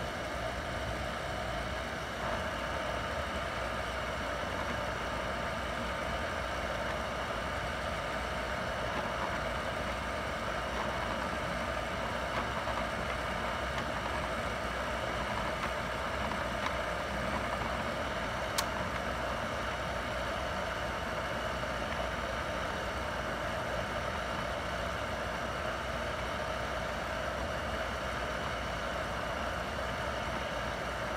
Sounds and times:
Printer: 0.0s - 31.1s.

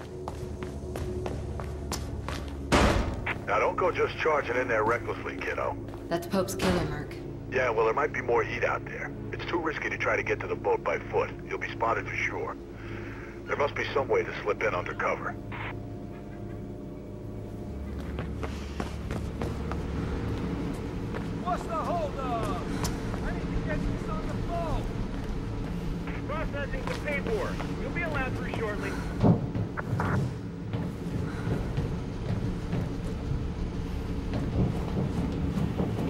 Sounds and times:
Music: 0.0s - 22.6s.

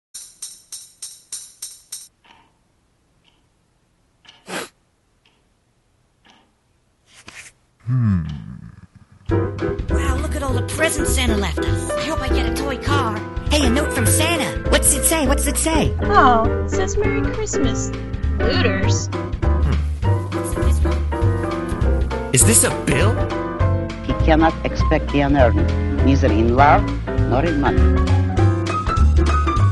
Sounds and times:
Music: 9.3s - 29.7s.

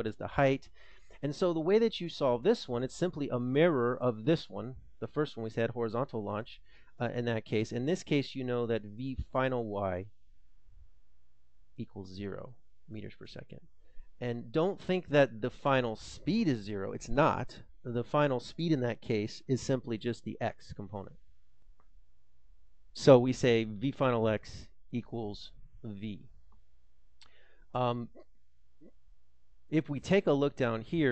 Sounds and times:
Speech: 0.0s - 10.1s, 11.8s - 21.2s, 23.0s - 26.3s, 27.8s - 28.2s, 29.7s - 31.1s.

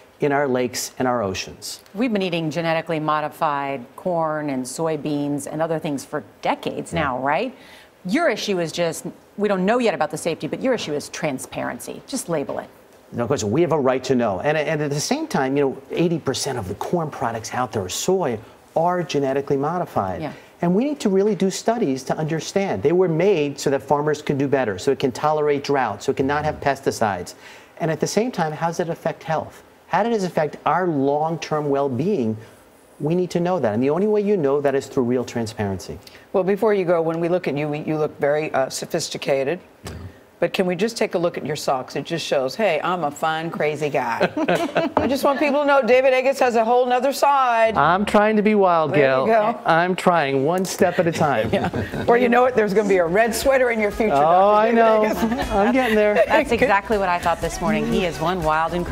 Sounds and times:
Female speech, woman speaking: 2.0s - 12.8s, 40.4s - 44.4s, 45.0s - 47.8s, 49.0s - 49.7s, 52.1s - 58.9s.

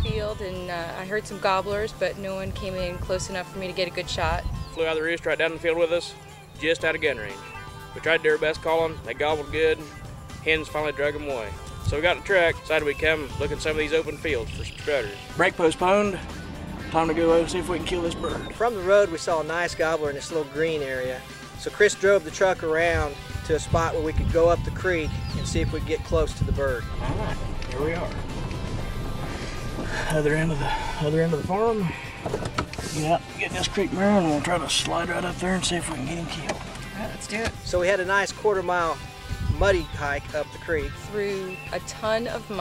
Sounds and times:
Music: 0.0s - 42.6s.

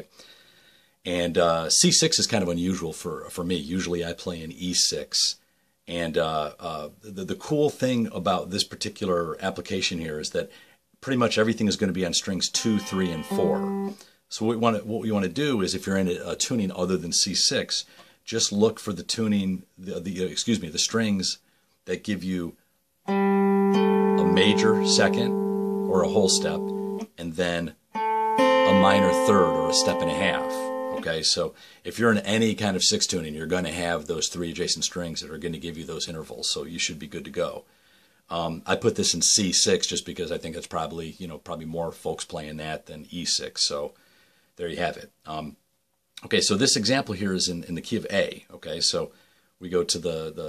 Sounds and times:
Speech: 0.0s - 0.2s, 1.0s - 22.6s, 24.2s - 27.8s, 28.6s - 37.7s, 38.3s - 44.0s, 44.6s - 45.6s, 46.2s - 50.4s
Music: 12.6s - 14.0s, 23.1s - 27.1s, 27.9s - 31.0s.

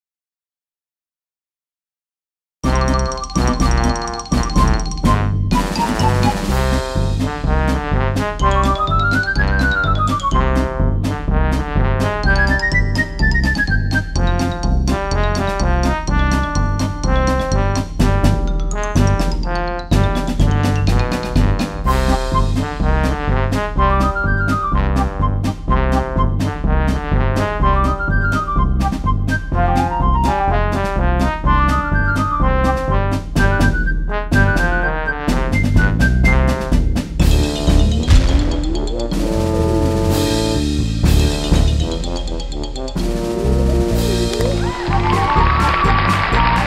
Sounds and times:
Music: 2.6s - 46.6s.

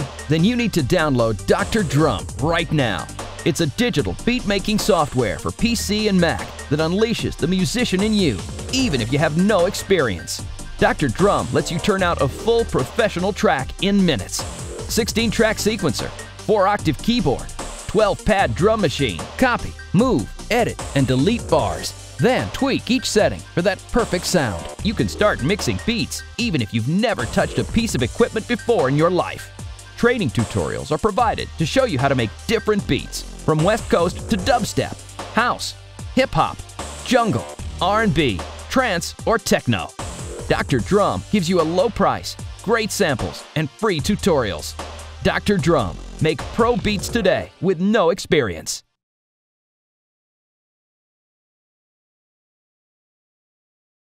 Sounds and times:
Speech: 0.0s - 48.9s
Dubstep: 33.5s - 34.7s.

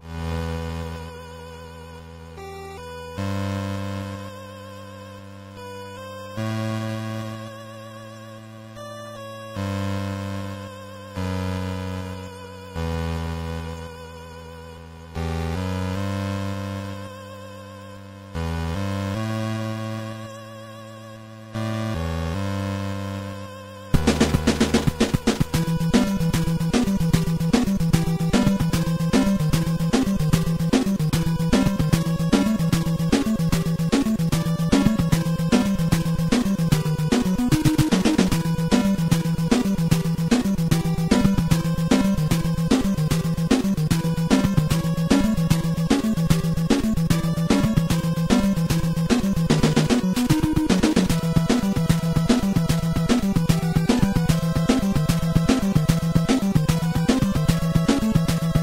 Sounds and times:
Video game music: 0.0s - 58.6s.

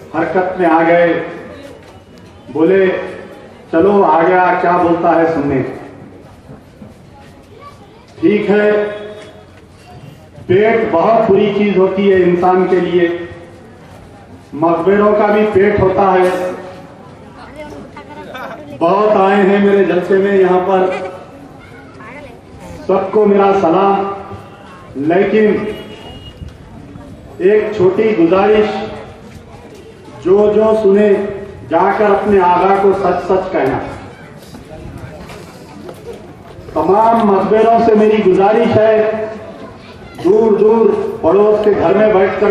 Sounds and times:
Male speech, man speaking: 0.0s - 1.7s, 2.5s - 6.0s, 8.2s - 9.3s, 10.5s - 13.4s, 14.5s - 16.7s, 17.5s - 21.2s, 22.8s - 24.4s, 25.0s - 25.9s, 27.4s - 29.2s, 30.2s - 34.0s, 36.8s - 39.5s, 40.2s - 42.5s
Narration, monologue: 10.4s - 13.8s, 18.8s - 21.4s, 30.1s - 34.0s, 36.7s - 39.6s.

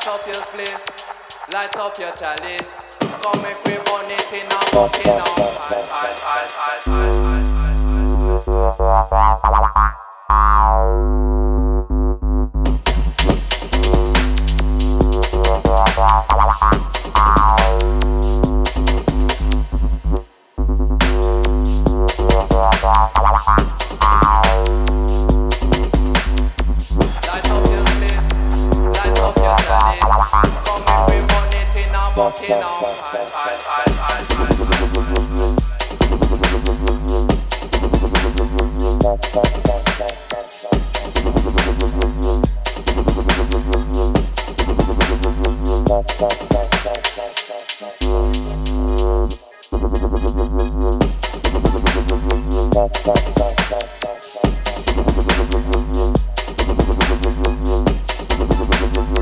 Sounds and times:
Electronic music: 0.0s - 59.2s.

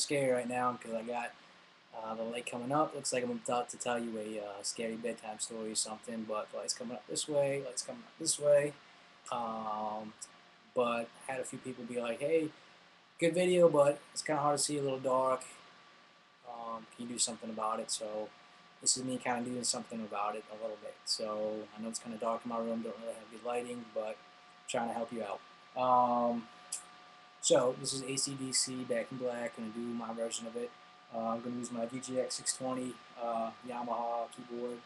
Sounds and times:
Speech: 0.0s - 1.4s, 2.0s - 12.6s, 13.2s - 15.6s, 16.5s - 26.5s, 27.4s - 34.8s.

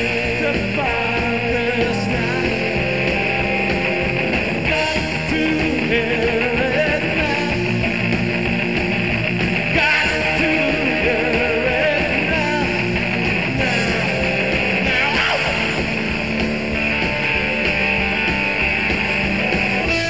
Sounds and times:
Rock and roll: 0.0s - 20.1s.

